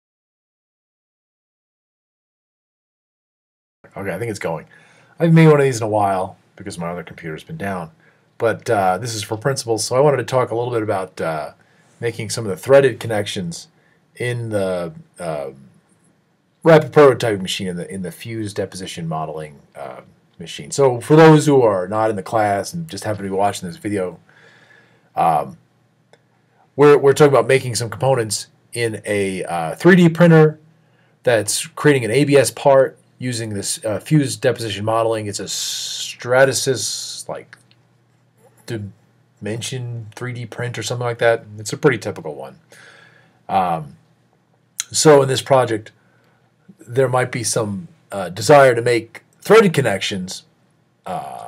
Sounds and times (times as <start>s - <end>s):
Speech: 3.9s - 15.8s, 16.6s - 24.2s, 25.2s - 25.6s, 26.8s - 37.6s, 38.5s - 42.6s, 43.5s - 44.0s, 44.8s - 46.0s, 46.7s - 51.4s.